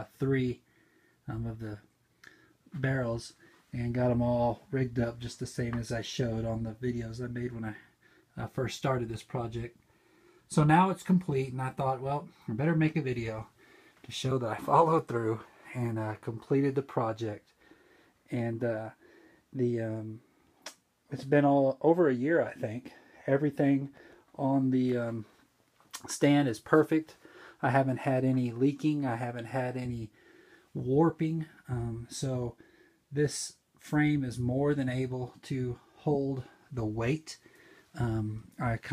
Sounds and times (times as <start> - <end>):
Speech: 0.0 - 0.6, 1.2 - 1.9, 2.7 - 9.8, 10.5 - 17.5, 18.3 - 19.0, 19.6 - 20.2, 21.1 - 30.2, 30.8 - 37.4, 38.0 - 38.9.